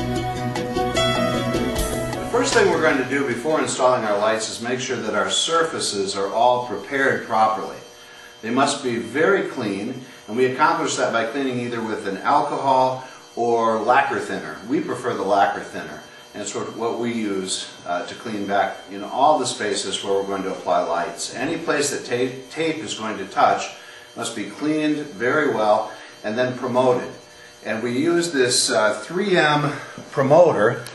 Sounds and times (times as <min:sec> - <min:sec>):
Speech: 0:02.4 - 0:07.8, 0:08.4 - 0:30.9.